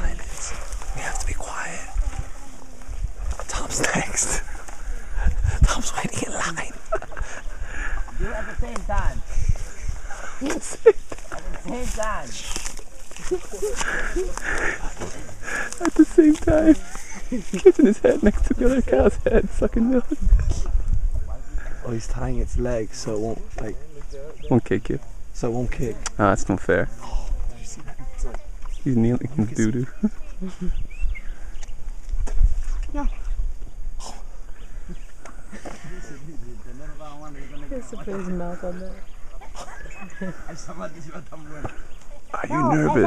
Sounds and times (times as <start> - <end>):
Male speech, man speaking: 21.2 - 26.9, 28.8 - 29.9, 36.0 - 38.3, 40.5 - 43.0.